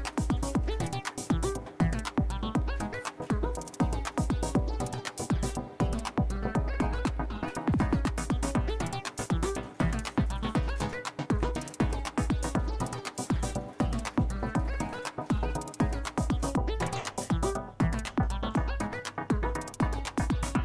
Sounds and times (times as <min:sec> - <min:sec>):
Music: 0:00.0 - 0:20.6.